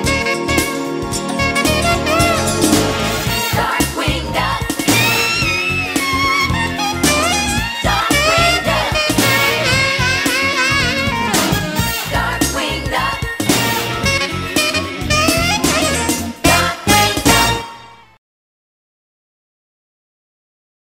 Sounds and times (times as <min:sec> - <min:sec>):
Music: 0:00.0 - 0:18.2.